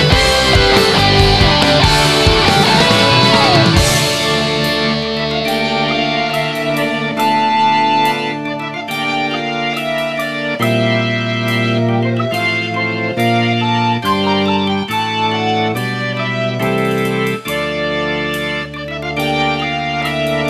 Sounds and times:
Background music: 0:00.0 - 0:20.4.

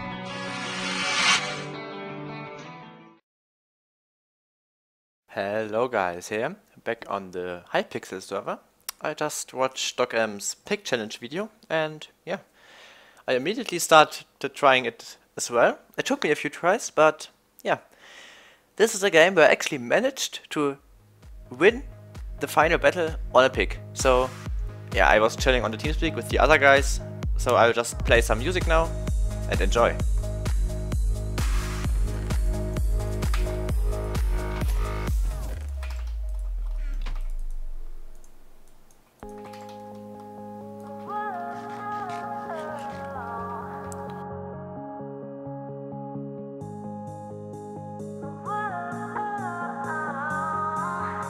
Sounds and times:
Music: 0:00.0 - 0:03.2, 0:20.9 - 0:37.2, 0:39.2 - 0:51.2
Speech: 0:05.3 - 0:12.5, 0:13.3 - 0:17.9, 0:18.8 - 0:20.8, 0:21.5 - 0:24.3, 0:25.0 - 0:28.9, 0:29.5 - 0:30.0.

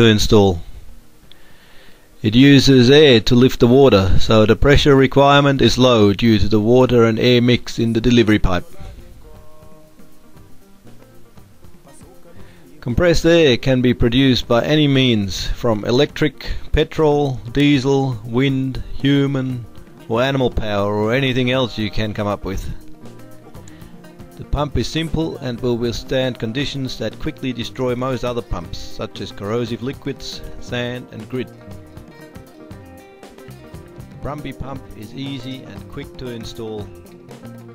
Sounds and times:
Speech: 0:00.0 - 0:00.7, 0:02.2 - 0:09.9, 0:12.0 - 0:22.8, 0:24.4 - 0:31.8, 0:34.2 - 0:37.0.

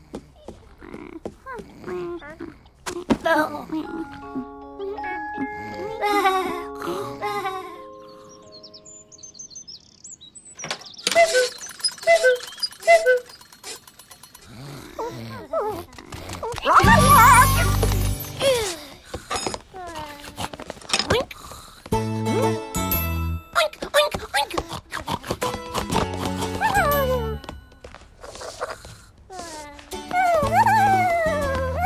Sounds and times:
Music: 0:03.9 - 0:09.1, 0:16.8 - 0:18.5, 0:22.0 - 0:23.5, 0:25.5 - 0:27.4, 0:30.0 - 0:31.8.

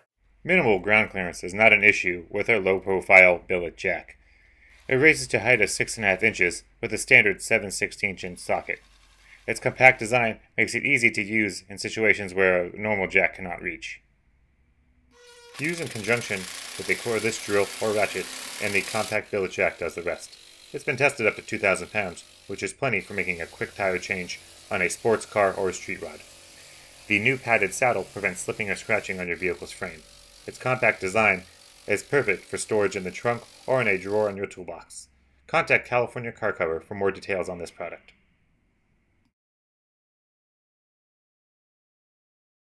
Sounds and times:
Speech: 0:00.5 - 0:04.1, 0:04.9 - 0:08.8, 0:09.5 - 0:14.0, 0:15.6 - 0:26.2, 0:27.1 - 0:38.1.

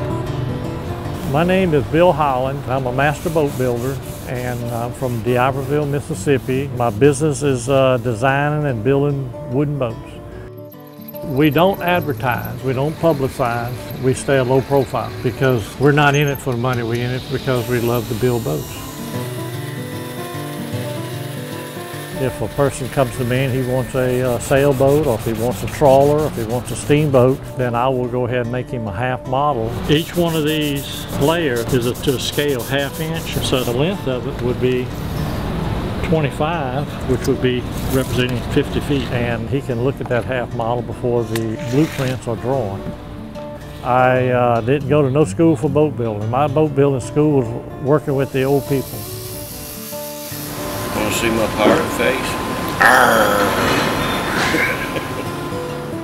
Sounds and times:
Music: 0:00.0 - 0:56.0
Speech: 0:01.3 - 0:10.1, 0:11.3 - 0:18.7, 0:22.2 - 0:34.9, 0:36.0 - 0:42.8, 0:43.9 - 0:48.9, 0:51.0 - 0:52.4.

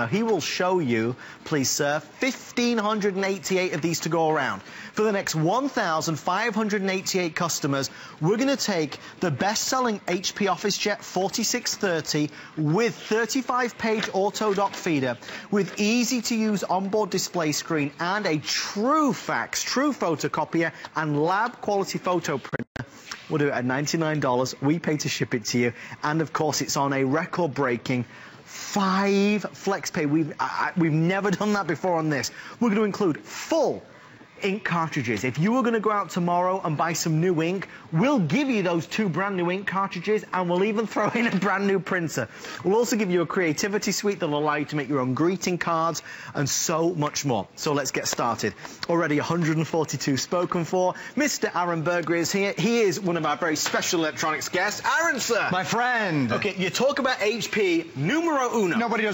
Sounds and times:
Speech: 0:00.0 - 0:59.1.

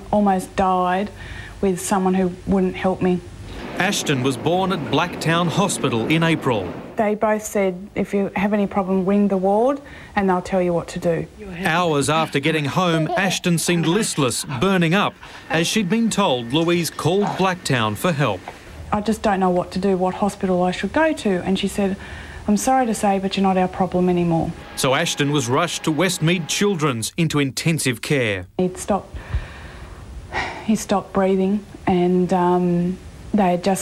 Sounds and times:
Speech: 0:03.8 - 0:18.4.

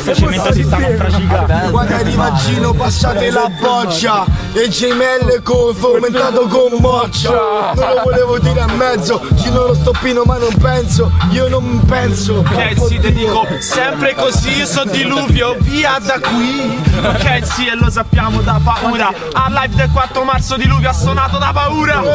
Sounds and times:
Hip hop music: 0:00.0 - 0:22.1
Rapping: 0:00.0 - 0:22.1.

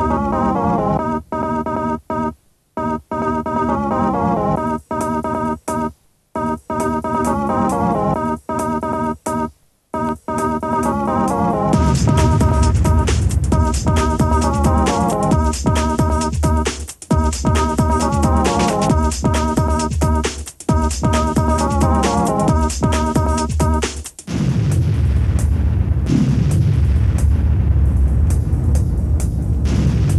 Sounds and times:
Music: 0:00.0 - 0:01.9, 0:03.0 - 0:30.1.

